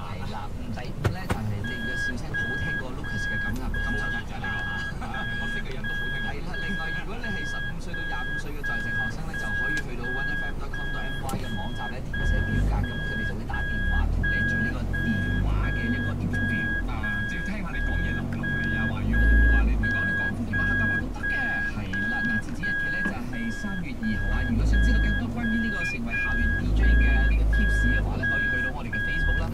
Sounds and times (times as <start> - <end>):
Car: 0.0 - 29.5
Speech: 0.0 - 29.5.